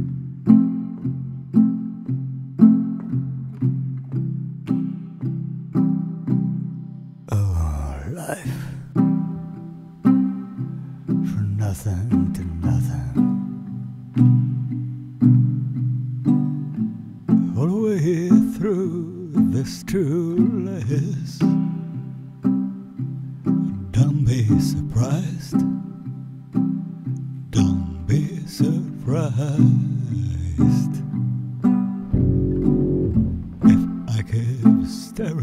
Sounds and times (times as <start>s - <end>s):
Music: 0.0s - 35.4s.